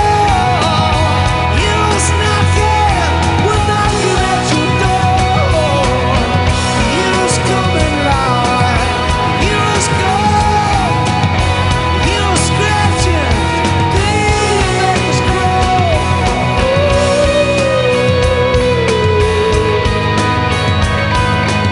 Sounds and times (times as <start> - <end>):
Music: 0.0 - 21.7.